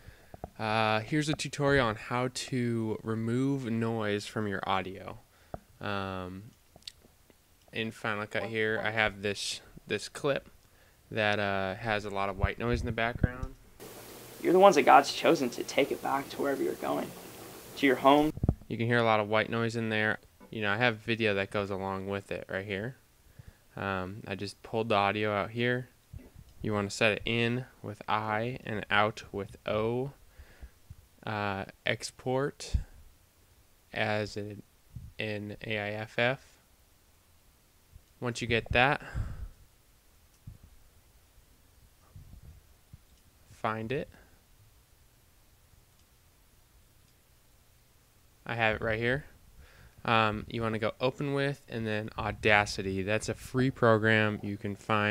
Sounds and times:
White noise: 0:00.0 - 0:42.1, 0:42.7 - 0:55.1
Speech: 0:00.6 - 0:05.2, 0:05.8 - 0:06.5, 0:07.8 - 0:10.5, 0:11.1 - 0:13.6, 0:14.4 - 0:17.2, 0:17.8 - 0:23.0, 0:23.8 - 0:26.0, 0:26.6 - 0:30.2, 0:31.2 - 0:32.9, 0:33.9 - 0:34.6, 0:35.2 - 0:36.5, 0:38.2 - 0:39.2, 0:43.6 - 0:44.2, 0:48.5 - 0:49.4, 0:50.1 - 0:55.1.

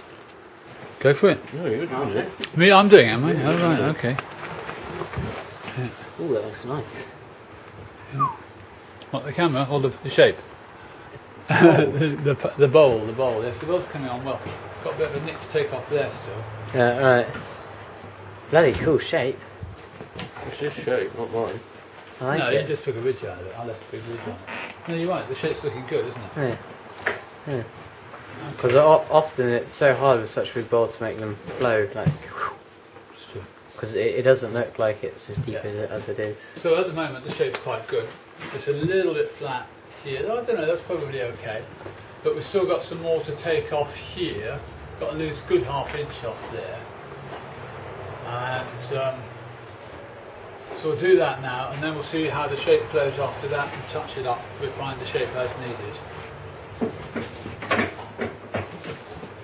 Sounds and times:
Speech: 0:01.0 - 0:04.2, 0:09.1 - 0:10.4, 0:12.0 - 0:17.4, 0:18.5 - 0:19.4, 0:20.4 - 0:26.6, 0:28.4 - 0:32.3, 0:33.2 - 0:46.9, 0:48.2 - 0:49.3, 0:50.8 - 0:56.1.

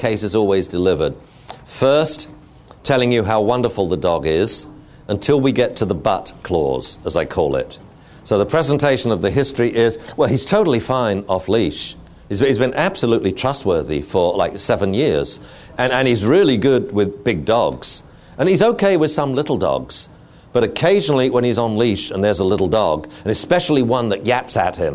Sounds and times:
Speech: 0:00.0 - 0:24.9.

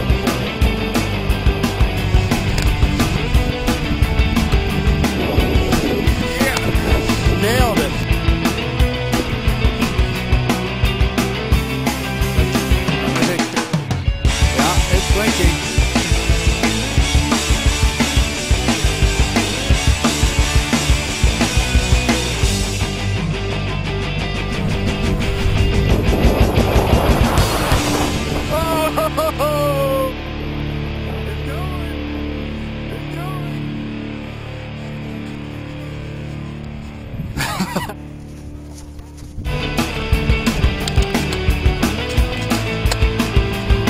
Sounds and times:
Music: 0:00.0 - 0:43.8
Speech: 0:06.3 - 0:08.0, 0:13.0 - 0:13.6, 0:14.6 - 0:15.6, 0:31.2 - 0:32.0, 0:32.9 - 0:33.6.

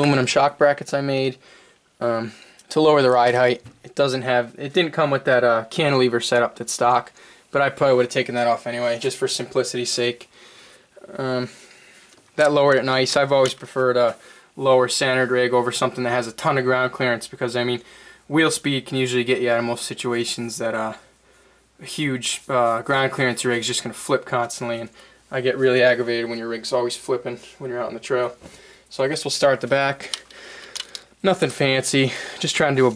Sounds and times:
Speech: 0:00.0 - 0:01.4, 0:02.0 - 0:10.3, 0:11.0 - 0:11.6, 0:12.4 - 0:21.1, 0:21.8 - 0:30.2, 0:31.2 - 0:32.9.

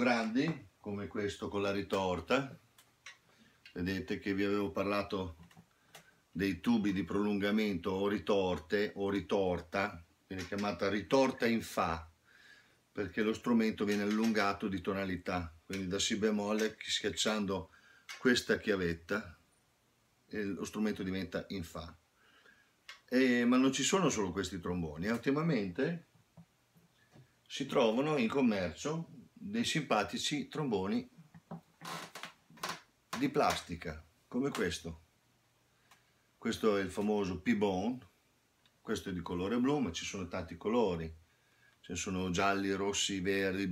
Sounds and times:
Speech: 0:00.0 - 0:02.6, 0:03.7 - 0:05.4, 0:06.4 - 0:12.1, 0:13.0 - 0:19.4, 0:20.3 - 0:22.0, 0:23.1 - 0:26.1, 0:27.5 - 0:31.1, 0:33.2 - 0:35.0, 0:36.4 - 0:38.2, 0:38.8 - 0:41.2, 0:41.8 - 0:43.7.

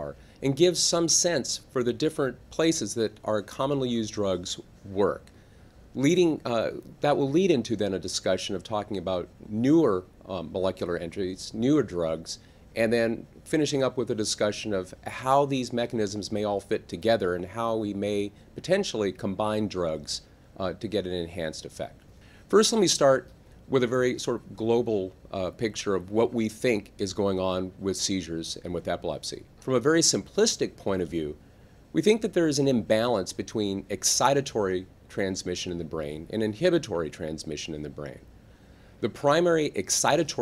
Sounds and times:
Speech: 0:00.0 - 0:05.3, 0:06.0 - 0:38.3, 0:39.0 - 0:40.4.

